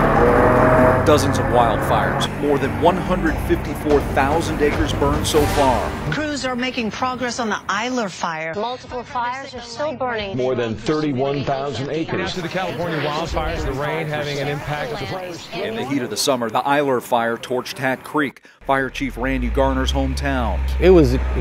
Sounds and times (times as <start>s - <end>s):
Music: 0.0s - 10.3s
Speech: 1.0s - 21.4s.